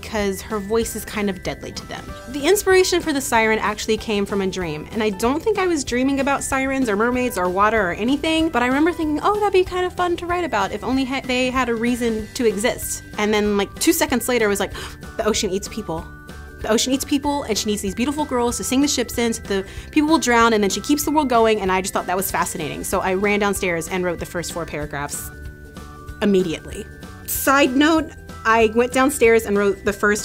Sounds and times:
Speech: 0.0s - 16.0s, 16.6s - 25.3s, 26.2s - 30.2s
Music: 0.0s - 30.2s.

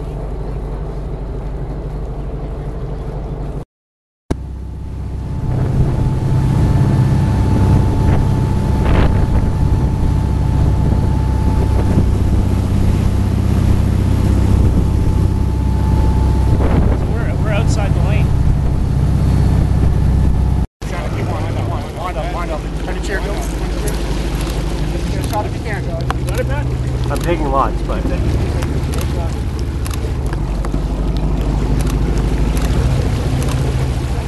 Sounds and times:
Speech: 17.0s - 18.3s, 20.8s - 24.0s, 25.0s - 29.4s.

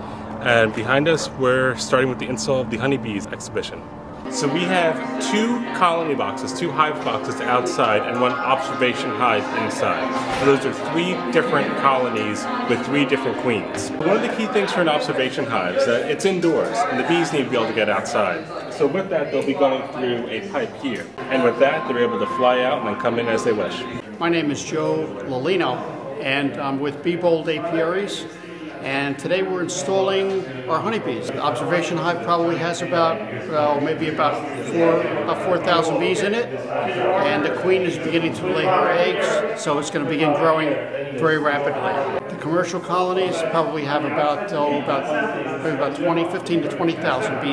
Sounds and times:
Speech: 0.4s - 47.5s.

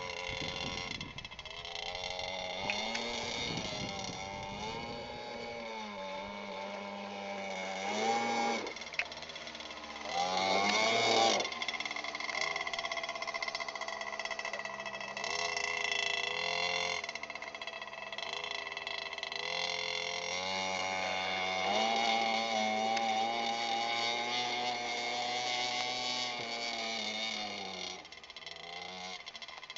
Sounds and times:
Motorboat, speedboat: 0.0s - 29.7s.

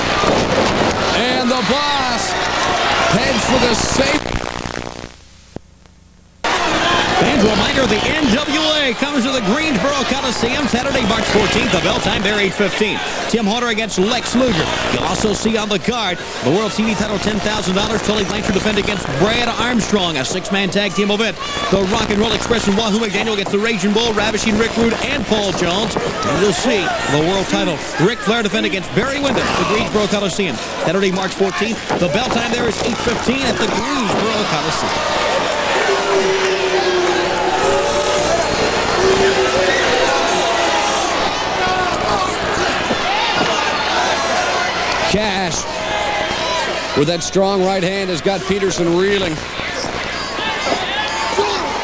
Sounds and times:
Speech: 3.1s - 4.2s, 7.0s - 35.0s, 47.0s - 49.4s.

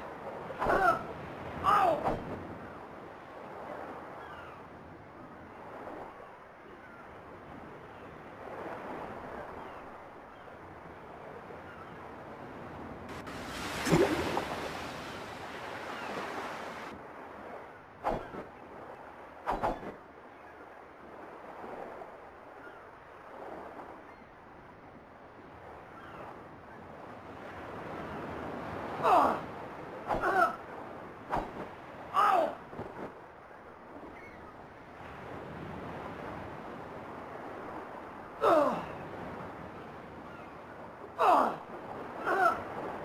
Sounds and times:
Sailboat, sailing ship: 0.0s - 43.0s.

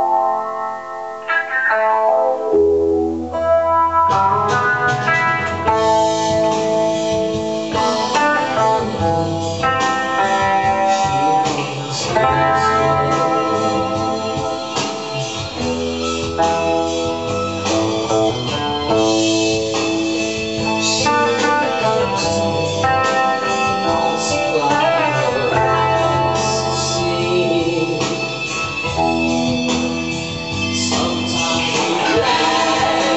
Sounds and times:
Guitar: 0.0s - 33.1s.

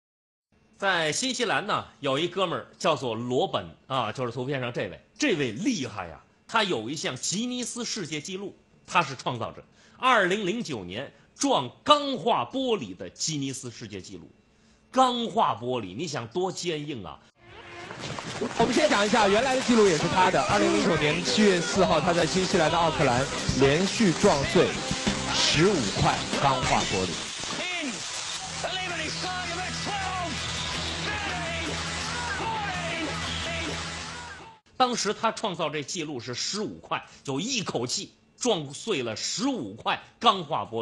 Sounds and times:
Narration, monologue: 0.5s - 17.4s, 18.6s - 30.2s, 34.6s - 40.8s.

